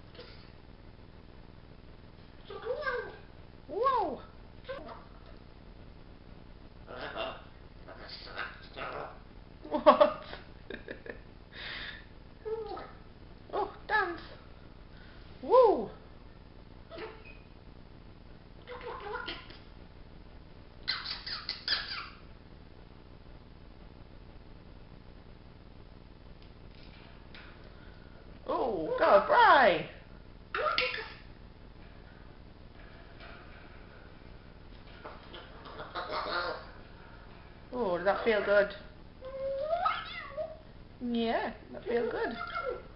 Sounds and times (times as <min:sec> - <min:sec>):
Speech: 0:02.5 - 0:05.0, 0:15.4 - 0:16.0, 0:28.5 - 0:30.0, 0:37.8 - 0:38.8, 0:41.0 - 0:42.8
Domestic animals, pets: 0:16.9 - 0:17.5, 0:18.7 - 0:19.7, 0:20.8 - 0:22.3, 0:34.9 - 0:36.9, 0:38.0 - 0:40.6, 0:41.9 - 0:42.9
Bird: 0:20.8 - 0:22.3, 0:34.9 - 0:36.8.